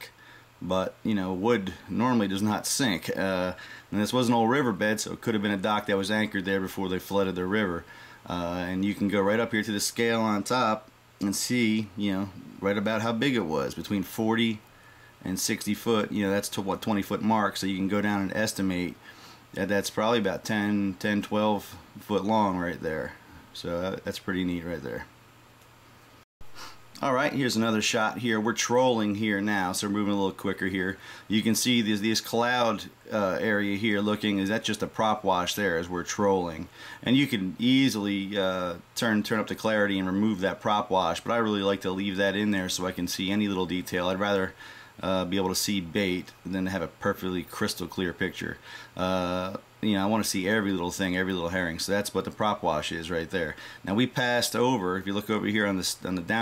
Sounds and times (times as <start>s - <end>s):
Speech: 0.0s - 14.6s, 15.2s - 19.0s, 19.6s - 25.1s, 27.0s - 56.4s.